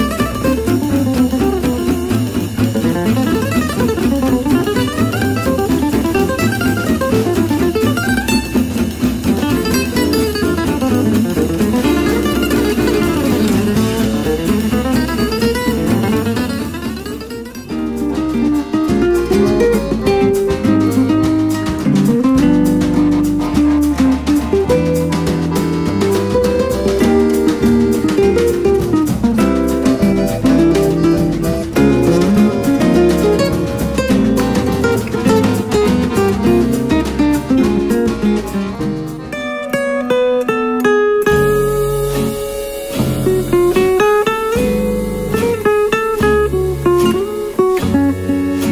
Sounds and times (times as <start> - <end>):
Swing music: 0.0 - 48.7.